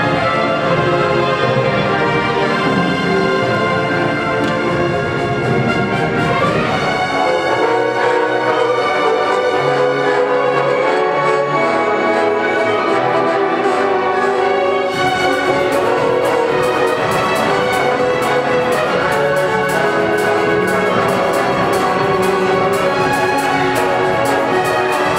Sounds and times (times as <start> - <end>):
Classical music: 0.0 - 25.1
Orchestra: 0.0 - 25.1.